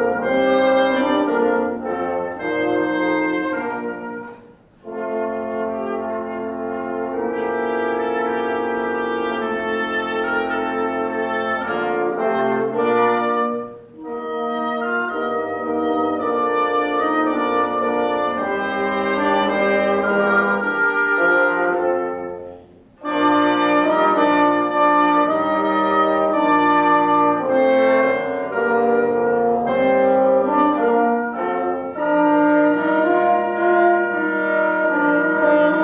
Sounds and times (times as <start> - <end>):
Classical music: 0.0 - 35.8
French horn: 0.0 - 35.8
Wind instrument, woodwind instrument: 0.0 - 35.8.